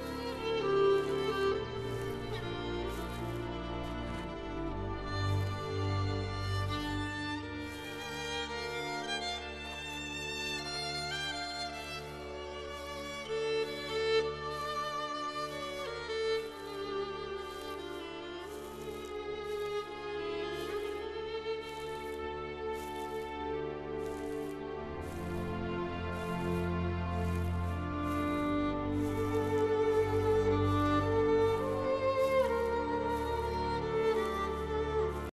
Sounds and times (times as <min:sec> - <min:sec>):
Music: 0:00.0 - 0:35.3
Walk, footsteps: 0:00.0 - 0:35.3.